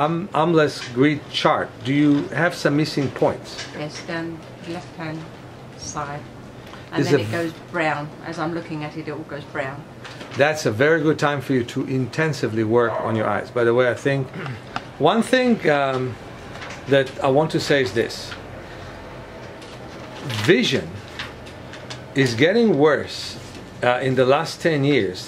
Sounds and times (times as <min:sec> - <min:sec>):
Speech: 0:00.0 - 0:05.2, 0:06.9 - 0:09.8, 0:10.4 - 0:14.3, 0:15.0 - 0:16.2, 0:16.9 - 0:18.4, 0:20.2 - 0:21.0, 0:22.2 - 0:25.2.